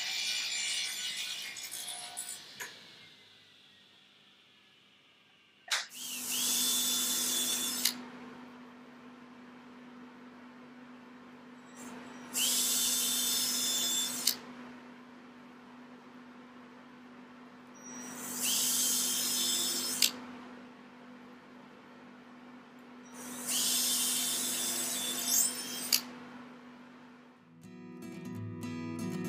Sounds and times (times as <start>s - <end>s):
Drill: 0.0s - 4.1s, 5.8s - 8.0s, 11.8s - 14.4s, 17.8s - 20.2s, 23.1s - 26.1s.